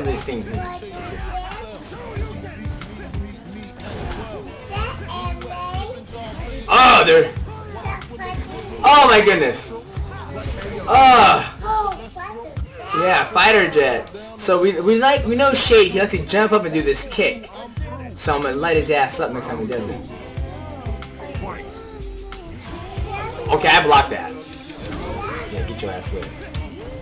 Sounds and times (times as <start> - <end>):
Music: 0.0 - 27.0
Speech: 12.7 - 20.2, 23.2 - 24.4.